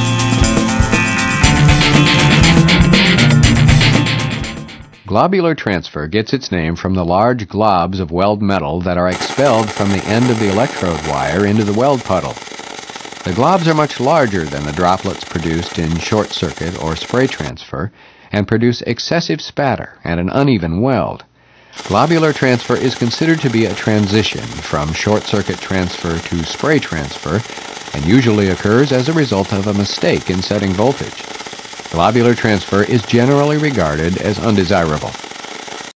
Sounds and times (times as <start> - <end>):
Speech: 5.1 - 12.4, 13.3 - 31.2, 32.0 - 35.2.